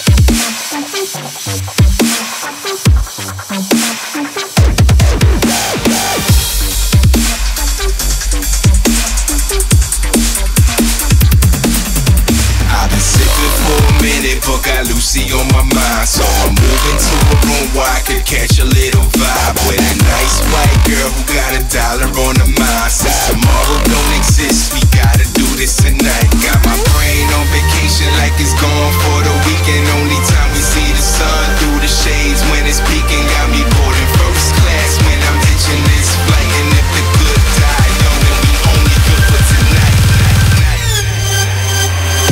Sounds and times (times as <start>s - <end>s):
Dubstep: 0.0s - 42.3s.